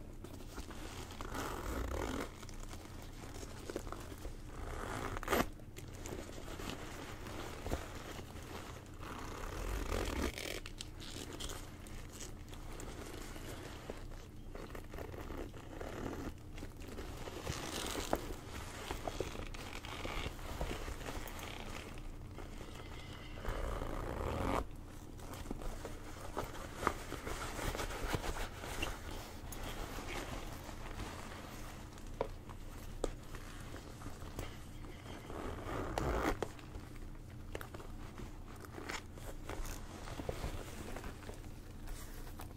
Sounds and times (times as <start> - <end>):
Zipper (clothing): 0.7 - 3.9, 4.5 - 24.7, 33.3 - 36.6, 38.6 - 41.1.